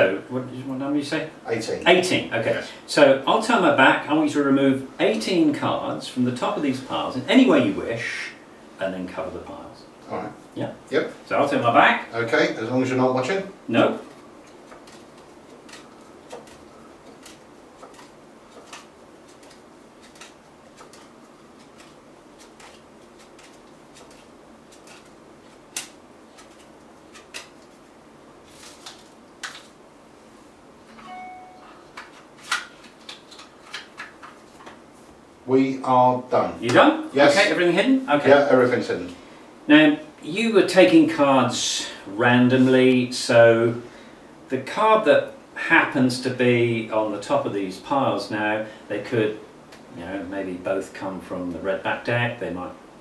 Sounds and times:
Inside, small room: 0.0s - 53.0s.

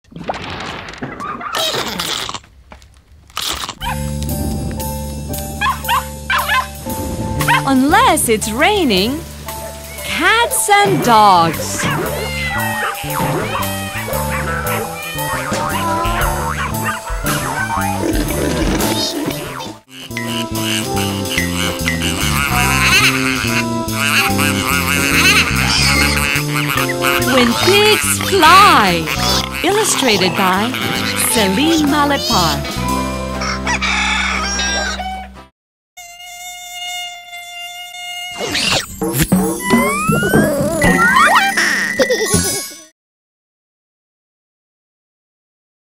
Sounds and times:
Music: 3.8s - 35.5s, 38.8s - 42.9s
Speech: 7.7s - 9.2s, 10.1s - 11.8s, 27.3s - 32.6s.

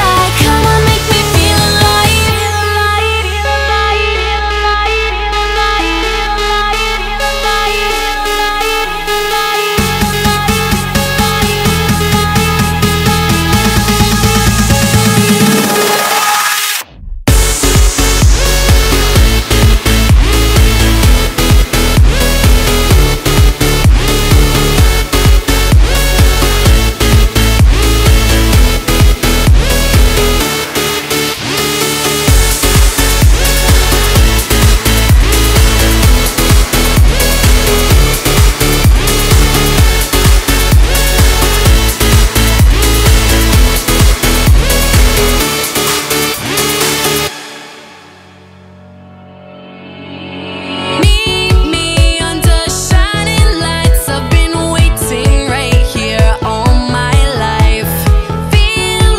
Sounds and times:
Electronic dance music: 0.0s - 59.1s.

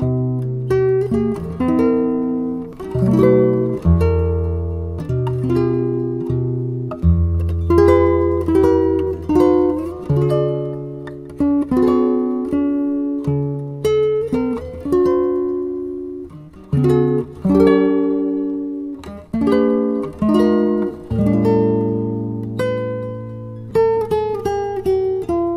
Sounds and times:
Guitar: 0.0s - 25.5s.

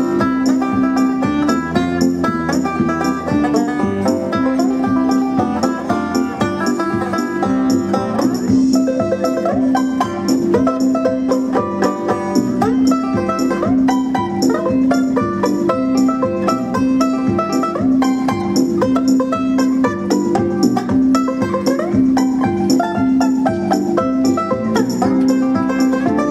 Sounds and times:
Banjo: 0.0s - 26.3s
Guitar: 0.0s - 26.3s.

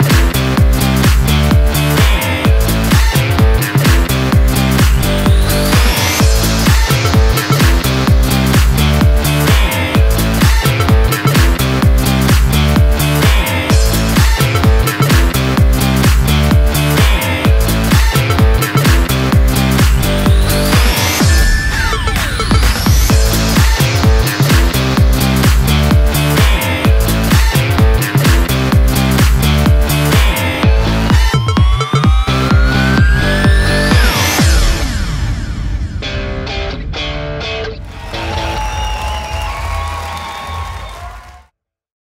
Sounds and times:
Music: 0.0s - 41.1s.

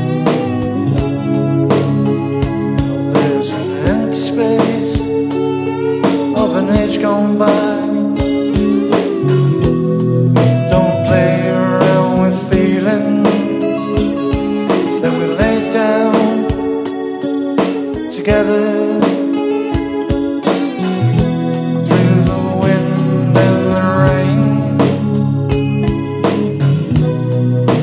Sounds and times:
Music: 0.0s - 27.8s.

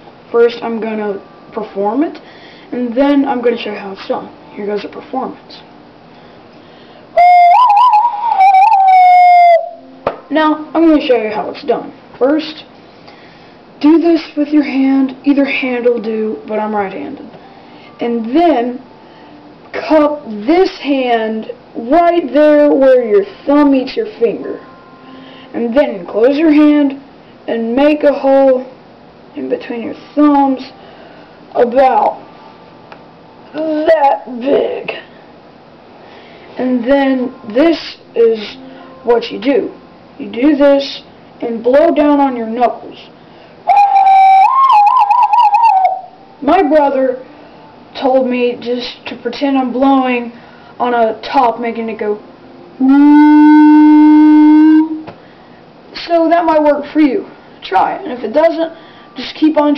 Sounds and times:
Inside, small room: 0.0s - 59.7s
Speech: 0.3s - 5.7s, 10.3s - 12.7s, 13.8s - 17.4s, 18.0s - 18.8s, 19.7s - 24.6s, 25.5s - 28.8s, 29.4s - 30.8s, 31.6s - 32.2s, 33.5s - 35.1s, 36.6s - 43.1s, 46.4s - 47.2s, 48.0s - 52.2s, 56.0s - 59.7s.

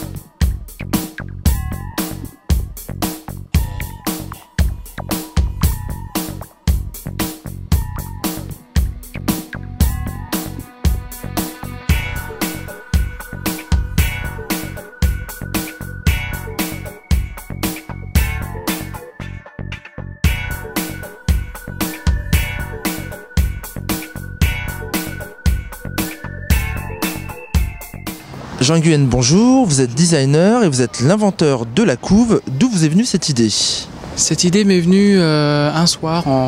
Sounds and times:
Music: 0.0s - 28.4s.

